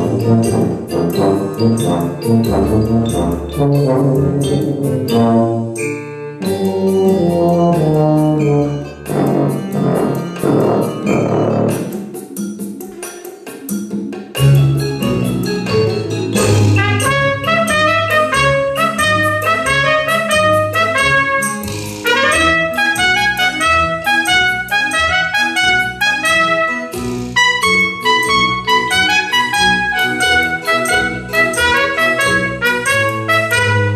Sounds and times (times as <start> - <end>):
Trumpet: 0.0 - 12.0, 16.4 - 33.9
Classical music: 0.0 - 12.1, 14.6 - 33.9.